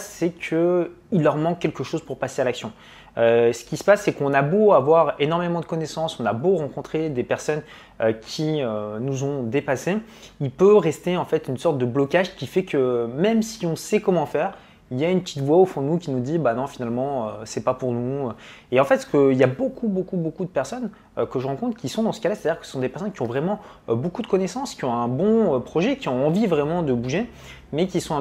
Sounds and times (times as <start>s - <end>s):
Speech: 0.0s - 28.2s.